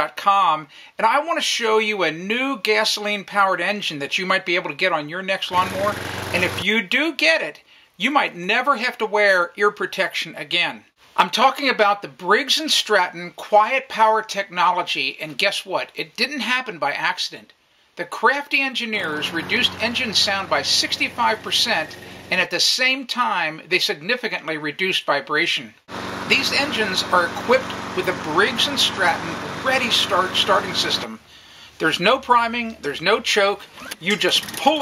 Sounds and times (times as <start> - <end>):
Speech: 0.0 - 31.2, 31.8 - 34.8.